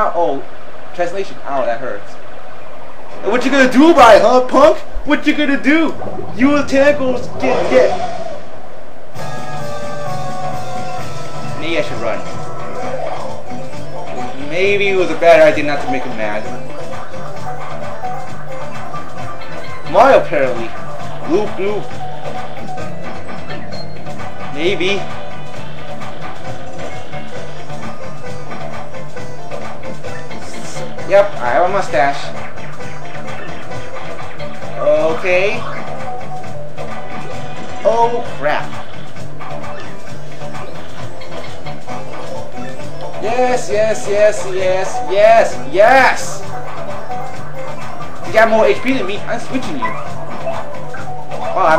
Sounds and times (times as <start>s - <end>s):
Speech: 3.2s - 8.2s, 11.6s - 12.3s, 14.4s - 16.5s, 19.9s - 21.9s, 24.6s - 25.1s, 30.5s - 32.3s, 34.8s - 35.6s, 37.8s - 38.7s, 48.3s - 49.8s, 51.6s - 51.7s
Music: 3.2s - 8.4s, 9.1s - 51.7s.